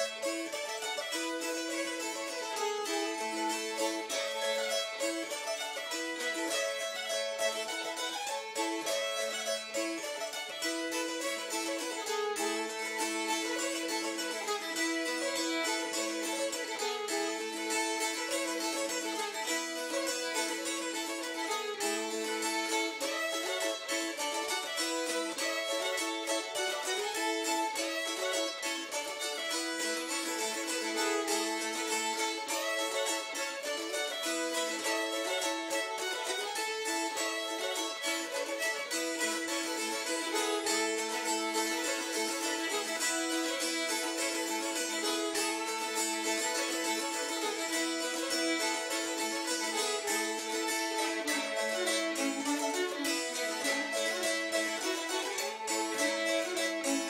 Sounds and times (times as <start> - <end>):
Violin, fiddle: 0.0 - 57.1.